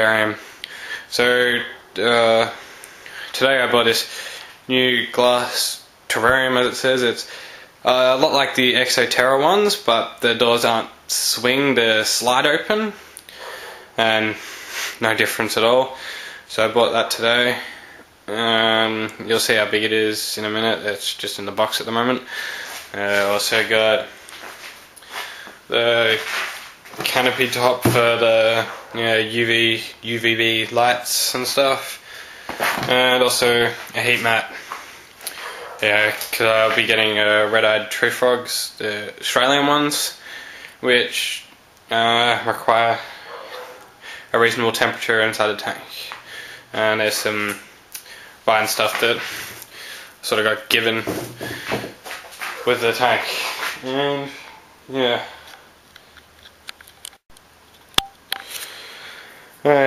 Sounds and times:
Speech: 0.0s - 0.4s, 1.1s - 2.6s, 3.3s - 4.1s, 4.7s - 13.0s, 14.0s - 14.4s, 15.0s - 22.3s, 22.9s - 24.1s, 25.7s - 26.3s, 27.0s - 32.0s, 32.8s - 34.6s, 35.8s - 40.2s, 40.8s - 43.2s, 44.3s - 47.6s, 48.5s - 49.3s, 50.2s - 51.2s, 52.6s - 55.4s, 59.6s - 59.8s.

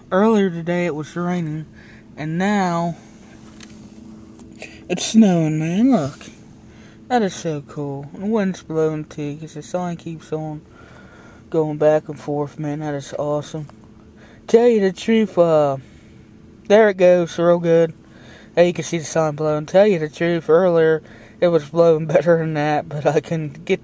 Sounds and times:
Speech: 0.0s - 3.0s, 4.6s - 6.4s, 7.1s - 10.6s, 11.5s - 13.7s, 14.5s - 15.8s, 16.7s - 18.0s, 18.6s - 23.8s.

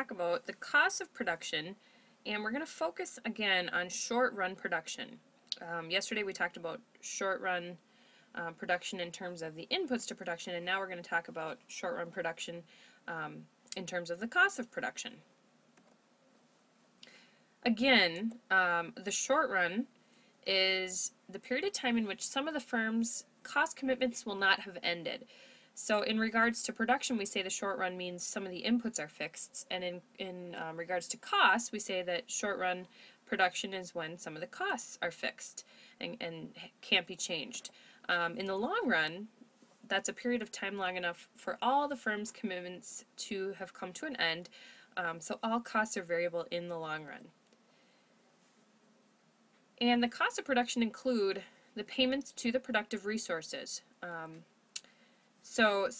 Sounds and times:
Speech: 0.0s - 7.8s, 8.4s - 15.2s, 17.6s - 19.9s, 20.5s - 47.3s, 49.8s - 54.5s, 55.5s - 55.9s.

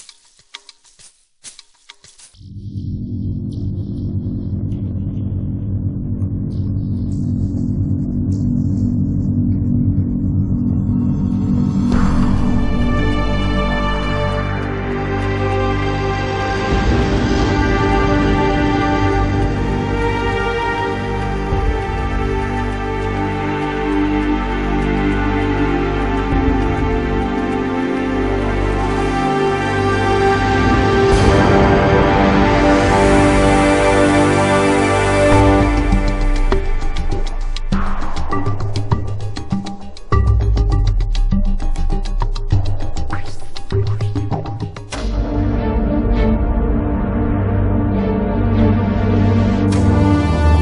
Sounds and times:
Theme music: 10.8s - 50.6s.

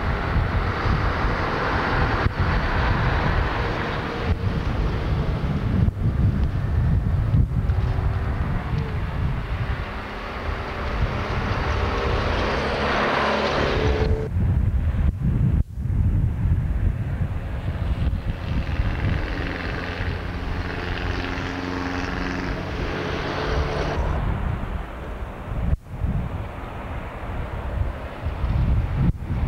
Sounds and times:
Outside, urban or manmade: 0.0s - 29.4s.

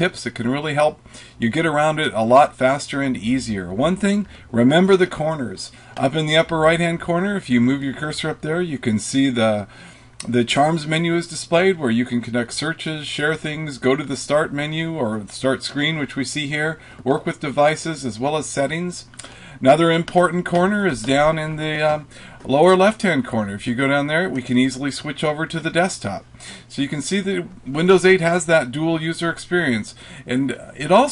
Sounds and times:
Speech: 0.0s - 31.1s.

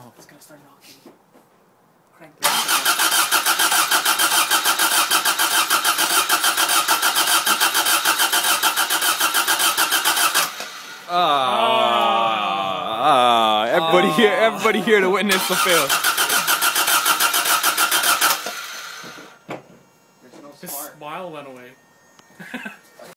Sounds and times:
Engine starting: 2.4s - 11.0s, 15.3s - 19.4s
Car: 2.4s - 11.1s, 15.4s - 19.5s
Medium engine (mid frequency): 2.4s - 11.1s, 15.4s - 20.0s
Speech: 11.1s - 15.9s, 20.2s - 21.8s.

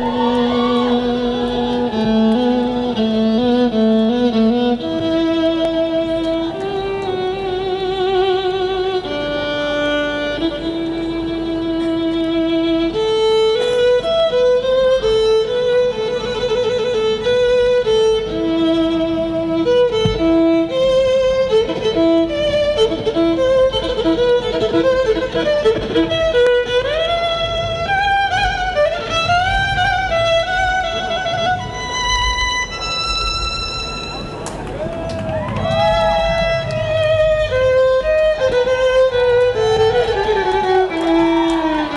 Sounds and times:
Violin, fiddle: 0.0s - 41.9s.

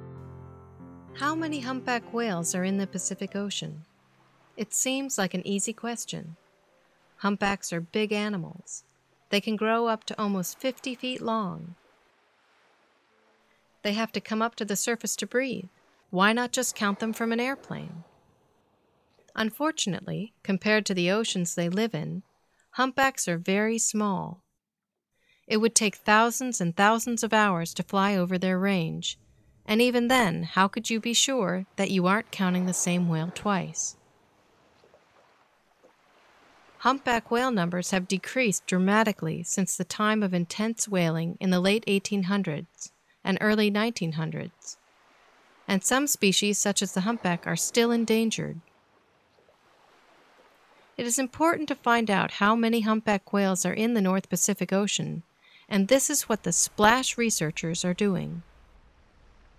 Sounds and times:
Speech: 1.2s - 3.8s, 4.6s - 6.4s, 7.2s - 11.8s, 13.9s - 18.0s, 19.3s - 22.2s, 22.8s - 24.4s, 25.5s - 33.9s, 36.8s - 44.8s, 45.7s - 48.6s, 51.0s - 58.4s.

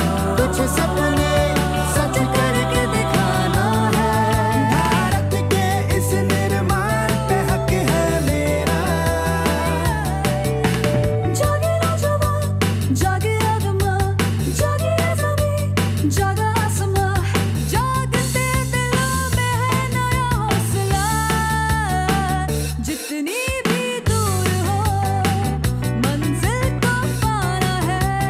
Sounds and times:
Music: 0.0s - 28.3s.

